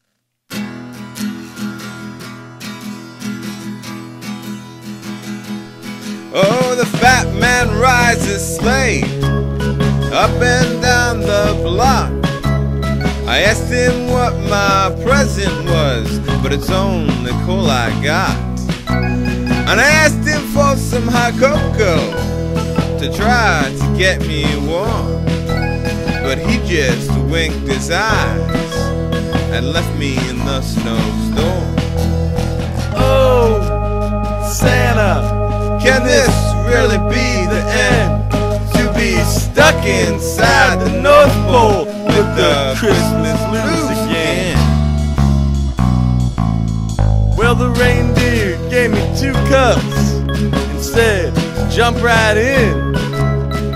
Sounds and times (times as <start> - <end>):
Music: 0.5 - 53.7.